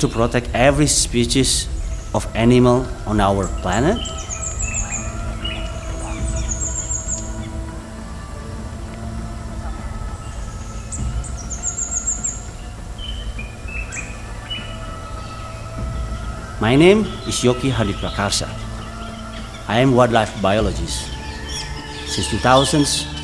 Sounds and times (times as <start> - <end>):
Chirp, tweet: 0.0 - 23.2
Music: 0.0 - 23.2.